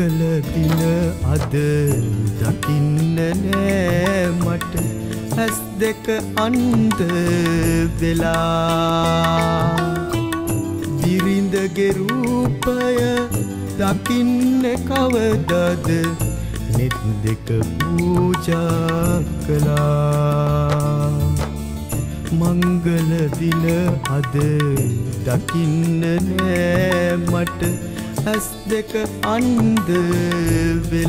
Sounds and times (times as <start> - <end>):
Wedding music: 0.0 - 31.0.